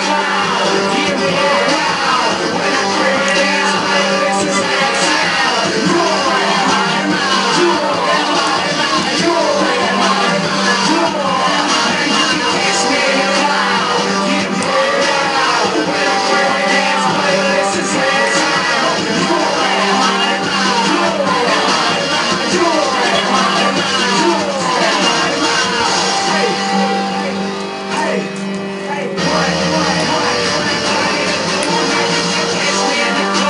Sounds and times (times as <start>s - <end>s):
Music: 0.0s - 33.5s.